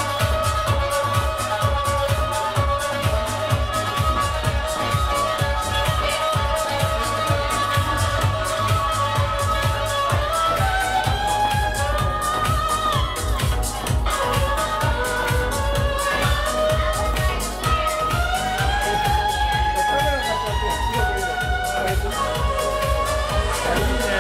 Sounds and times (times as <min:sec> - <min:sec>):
Violin, fiddle: 0:00.0 - 0:24.2
Speech: 0:17.2 - 0:24.2.